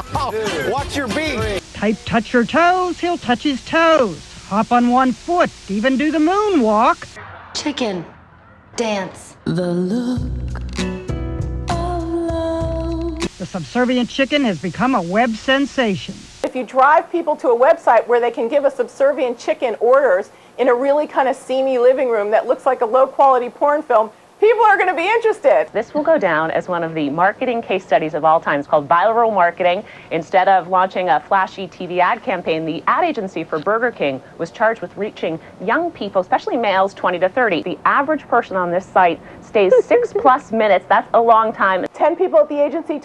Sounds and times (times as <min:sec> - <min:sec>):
Music: 0:00.0 - 0:02.0, 0:08.0 - 0:13.4.